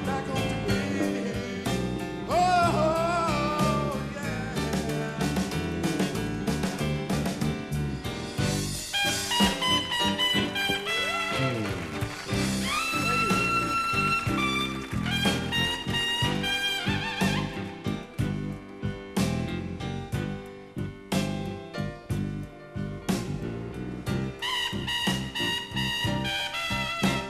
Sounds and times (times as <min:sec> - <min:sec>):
Jazz: 0:00.0 - 0:27.3.